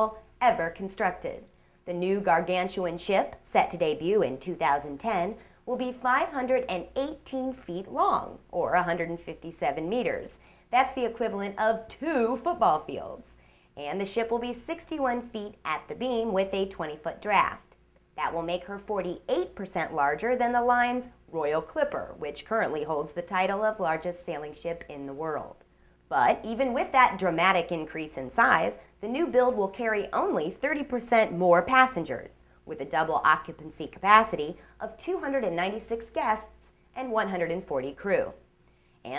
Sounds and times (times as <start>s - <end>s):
Speech: 0.0s - 38.4s.